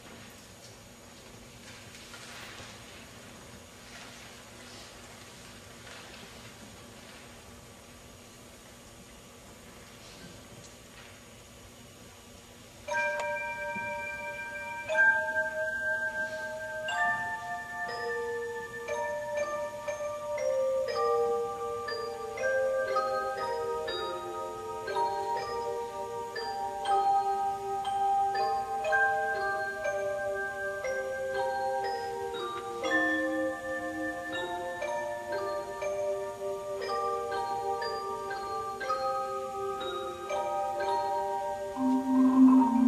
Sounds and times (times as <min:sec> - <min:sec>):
Glockenspiel: 0:12.8 - 0:42.8
Marimba, xylophone: 0:12.8 - 0:42.8.